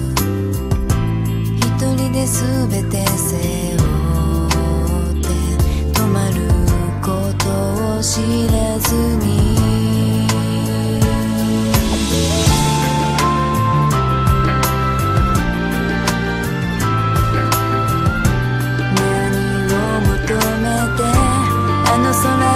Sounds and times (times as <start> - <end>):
Song: 9.8 - 22.5.